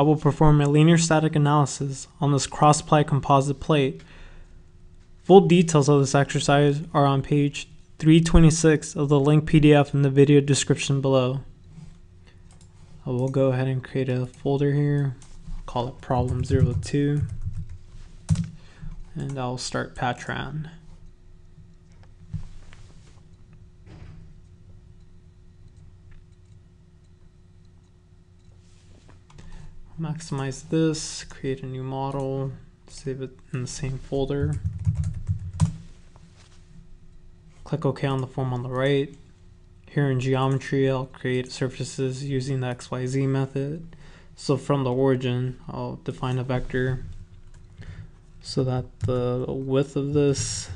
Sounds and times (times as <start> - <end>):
Speech: 0.0 - 4.0, 5.2 - 11.5, 13.0 - 17.4, 19.1 - 20.9, 30.0 - 34.6, 37.6 - 39.3, 39.9 - 47.1, 48.4 - 50.7.